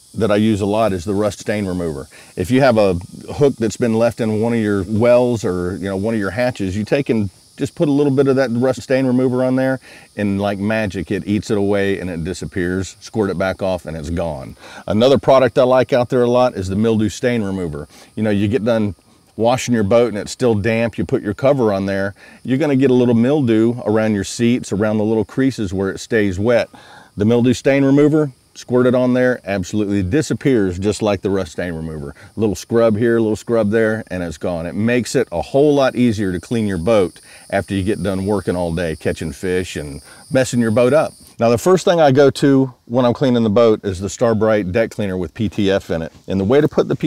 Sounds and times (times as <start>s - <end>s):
Speech: 0.2s - 47.0s.